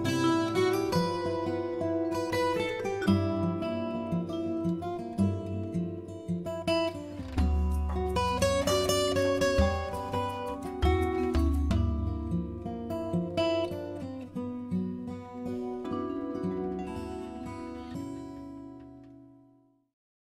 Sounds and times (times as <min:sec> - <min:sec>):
Music: 0:00.0 - 0:20.0.